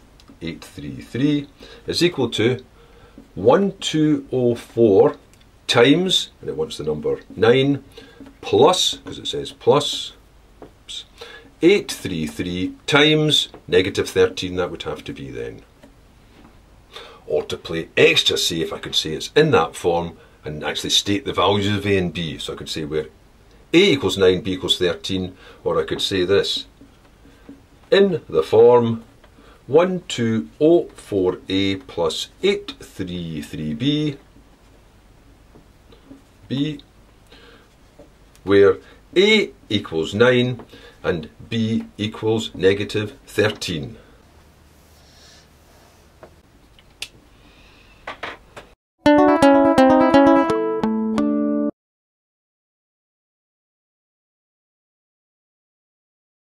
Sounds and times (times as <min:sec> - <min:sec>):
Speech: 0:00.4 - 0:02.7, 0:03.4 - 0:10.2, 0:10.9 - 0:15.7, 0:17.3 - 0:23.1, 0:23.7 - 0:26.7, 0:27.9 - 0:29.1, 0:29.7 - 0:34.2, 0:36.5 - 0:36.9, 0:38.4 - 0:44.0
Music: 0:49.0 - 0:51.8.